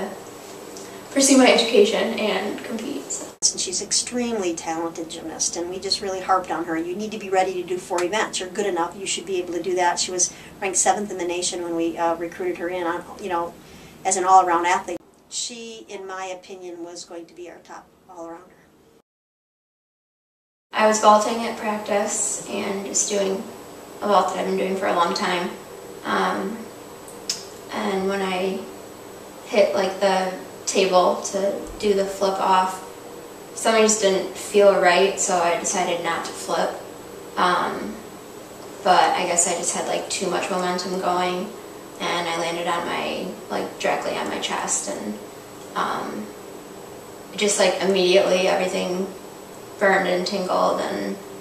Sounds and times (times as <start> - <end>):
Speech: 0.0 - 0.2, 1.1 - 18.5, 20.8 - 26.6, 27.7 - 28.7, 29.5 - 32.8, 33.6 - 36.8, 37.4 - 38.0, 38.8 - 46.3, 47.4 - 49.2, 49.8 - 51.2
Inside, small room: 0.0 - 19.0, 20.8 - 51.4.